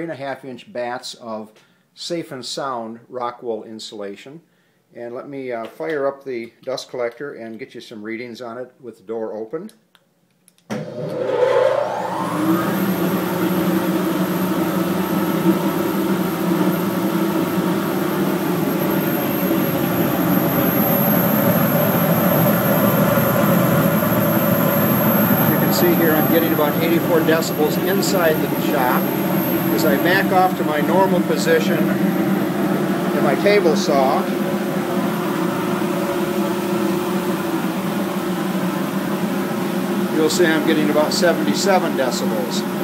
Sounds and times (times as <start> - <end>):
White noise: 11.9 - 42.8.